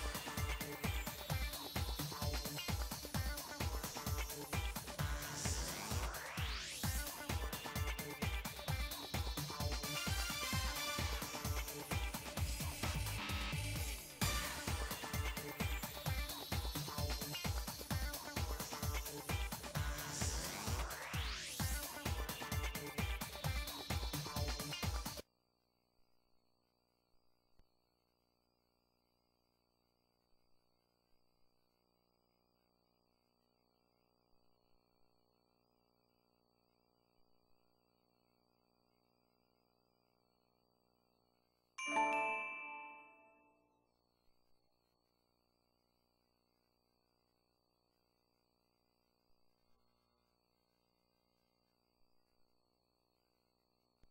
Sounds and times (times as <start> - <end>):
Music: 0.0 - 25.2, 41.8 - 43.8.